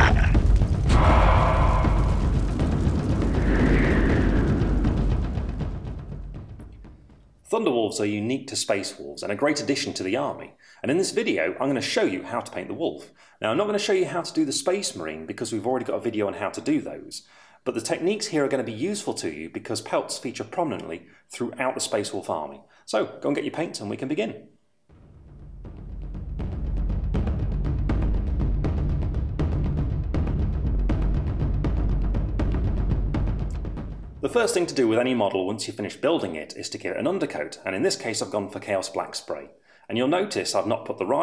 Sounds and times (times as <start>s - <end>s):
Music: 0.0s - 8.1s, 24.9s - 34.9s
Speech: 7.4s - 24.5s, 34.2s - 41.2s.